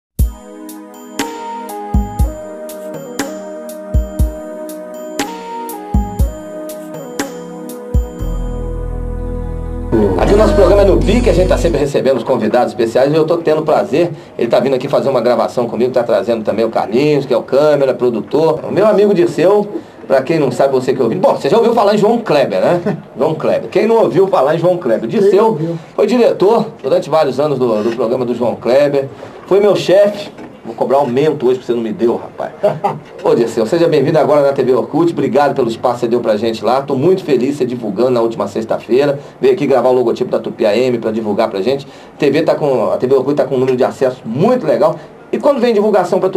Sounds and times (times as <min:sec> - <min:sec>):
Speech: 0:09.9 - 0:46.3.